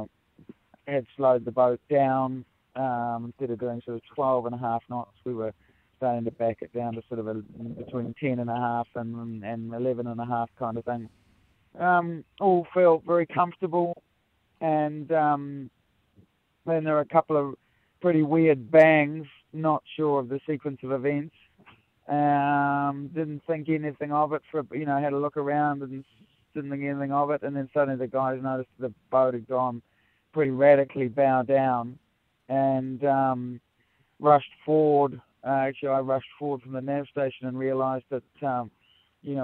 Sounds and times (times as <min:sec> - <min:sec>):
Speech: 0:00.8 - 0:11.1, 0:11.8 - 0:14.0, 0:14.6 - 0:15.7, 0:16.7 - 0:21.4, 0:22.1 - 0:33.6, 0:34.2 - 0:39.4.